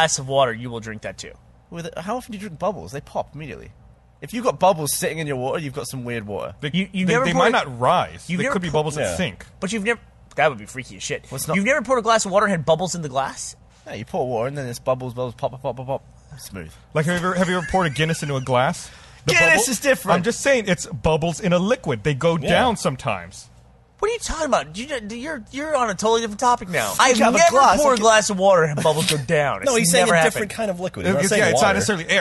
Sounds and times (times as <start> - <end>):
Speech: 0.0 - 32.2.